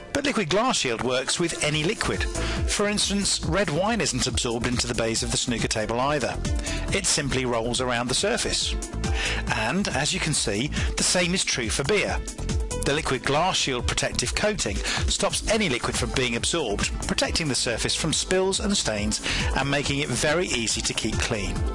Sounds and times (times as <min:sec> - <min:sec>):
Music: 0:00.0 - 0:21.7
Speech: 0:00.1 - 0:08.8, 0:09.5 - 0:12.2, 0:12.8 - 0:21.6.